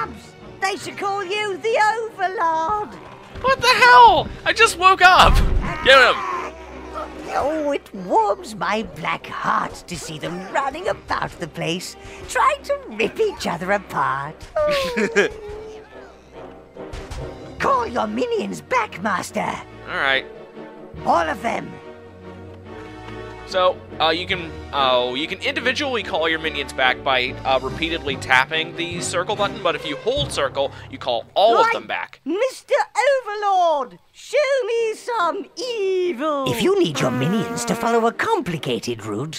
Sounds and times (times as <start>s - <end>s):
Music: 0.0s - 32.2s, 34.7s - 39.3s
Speech: 23.6s - 39.3s.